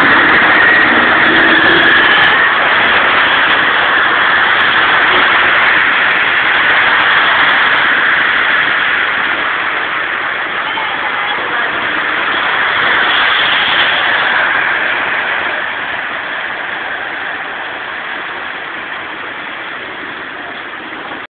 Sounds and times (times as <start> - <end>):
Rain on surface: 0.0 - 21.3.